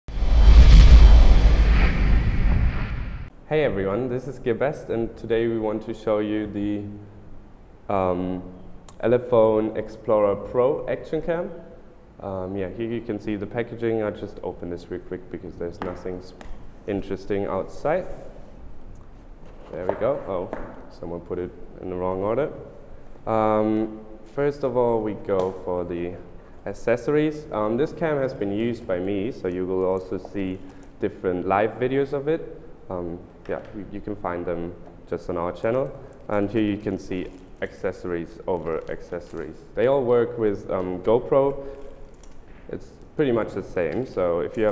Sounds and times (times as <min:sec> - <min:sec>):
Speech: 0:03.5 - 0:07.0, 0:07.9 - 0:18.4, 0:19.7 - 0:22.7, 0:23.3 - 0:41.8, 0:42.7 - 0:44.7.